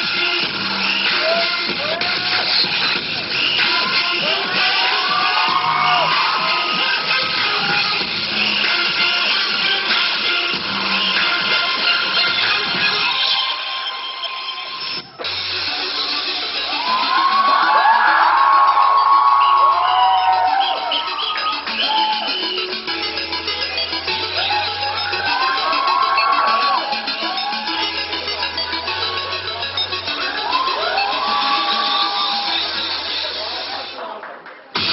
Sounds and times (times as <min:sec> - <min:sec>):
Electronic music: 0:00.0 - 0:34.1.